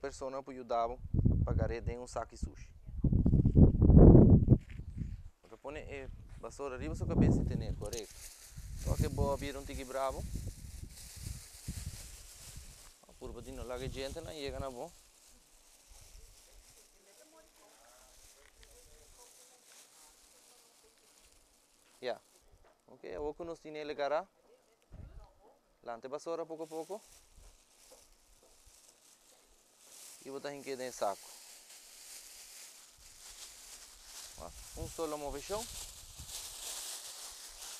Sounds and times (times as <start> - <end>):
Speech: 0.0 - 3.0, 5.5 - 8.1, 8.9 - 10.2, 13.1 - 15.0, 22.9 - 27.0, 30.2 - 31.2, 34.4 - 35.7.